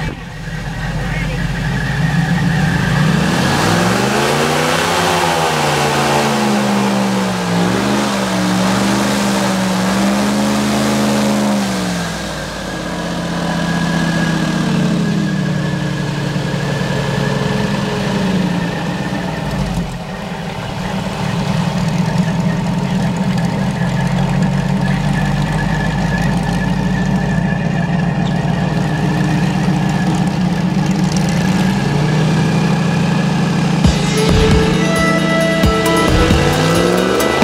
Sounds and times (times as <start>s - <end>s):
Motorboat, speedboat: 0.0s - 33.8s
Music: 33.9s - 37.4s.